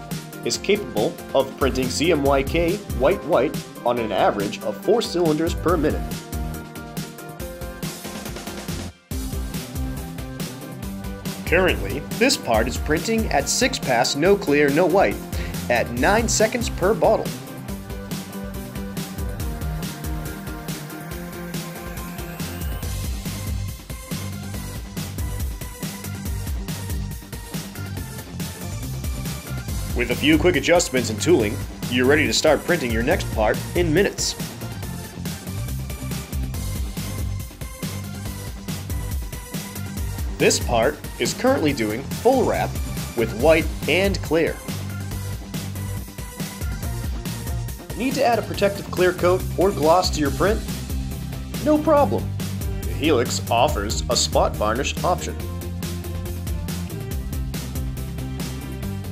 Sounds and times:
Music: 0:00.0 - 0:59.1
Speech: 0:00.5 - 0:06.1, 0:11.5 - 0:17.3, 0:30.0 - 0:34.4, 0:40.4 - 0:44.6, 0:48.0 - 0:50.7, 0:51.6 - 0:52.3, 0:52.9 - 0:55.4.

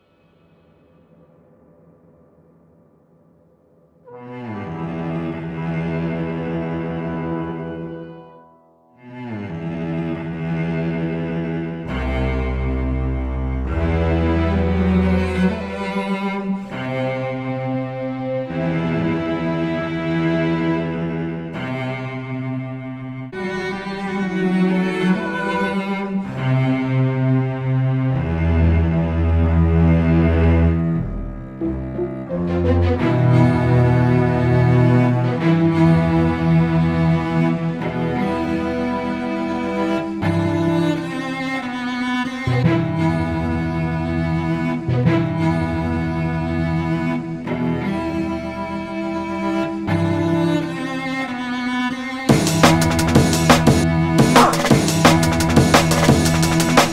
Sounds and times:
Theme music: 0:31.0 - 0:35.5, 0:52.3 - 0:56.9.

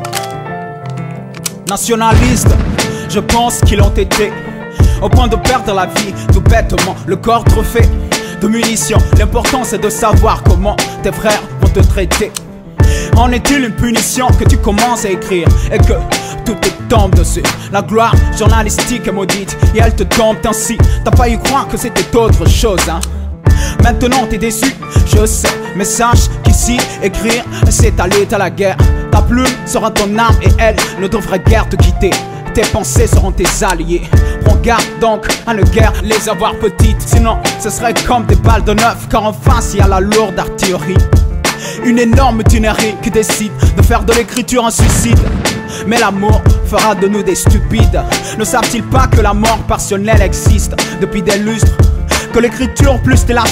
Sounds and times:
Music: 0:00.0 - 0:53.5.

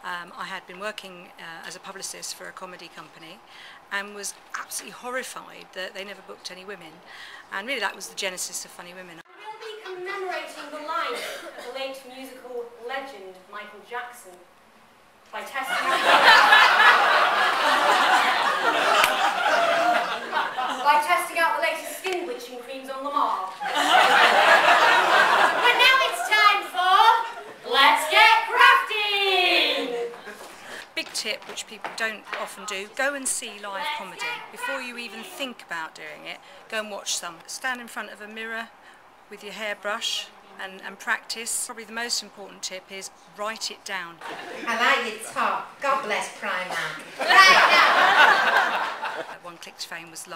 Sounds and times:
Female speech, woman speaking: 0:00.0 - 0:14.5, 0:15.3 - 0:16.1, 0:20.7 - 0:23.6, 0:25.6 - 0:30.3, 0:31.0 - 0:38.7, 0:39.3 - 0:48.0, 0:49.3 - 0:50.3.

